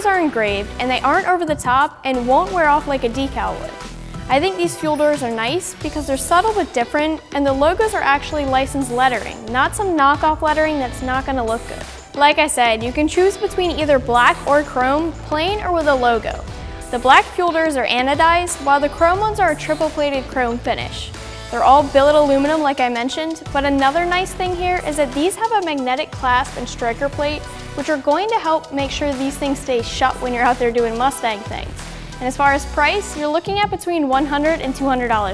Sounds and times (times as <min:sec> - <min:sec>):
Speech: 0:00.0 - 0:03.7, 0:04.3 - 0:16.4, 0:17.0 - 0:35.3
Music: 0:00.0 - 0:35.3.